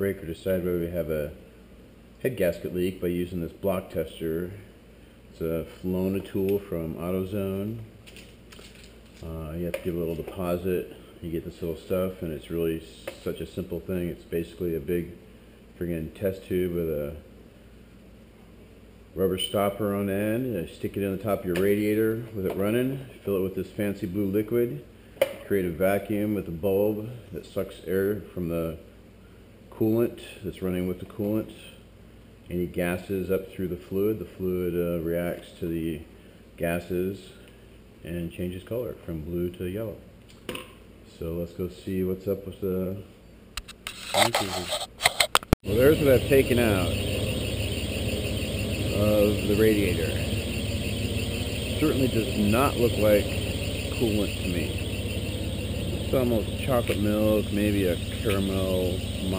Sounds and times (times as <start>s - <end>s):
Speech: 0.0s - 1.4s, 2.2s - 4.7s, 5.3s - 7.9s, 9.2s - 15.2s, 15.8s - 17.3s, 19.2s - 28.9s, 29.7s - 31.8s, 32.5s - 37.4s, 38.0s - 40.1s, 41.1s - 43.1s, 44.1s - 44.8s, 45.6s - 47.1s, 48.8s - 50.3s, 51.7s - 54.9s, 55.9s - 59.3s.